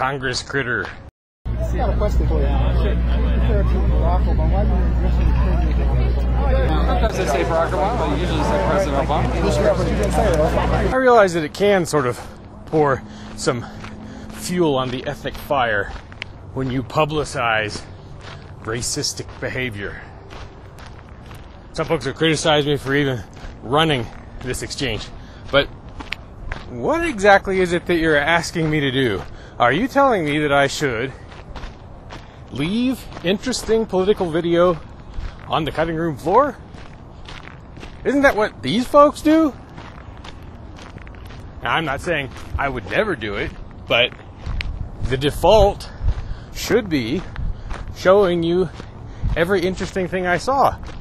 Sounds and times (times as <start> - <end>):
Male speech, man speaking: 0.0 - 17.9, 18.6 - 20.1, 21.7 - 25.7, 26.6 - 31.2, 32.5 - 34.8, 35.4 - 36.6, 38.0 - 39.6, 41.6 - 44.2, 45.0 - 46.0, 46.6 - 47.3, 47.9 - 48.8, 49.4 - 50.8
Narration, monologue: 0.0 - 51.0
Conversation: 1.5 - 50.9.